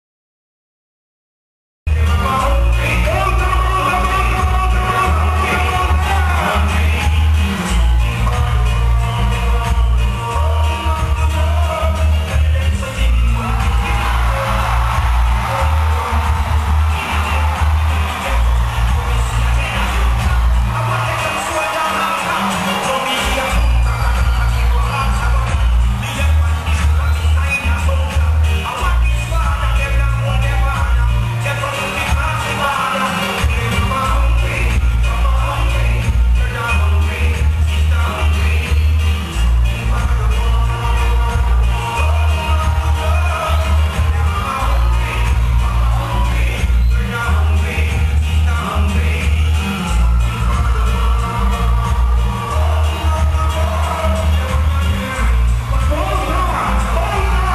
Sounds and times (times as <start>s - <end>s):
Music: 1.9s - 57.5s.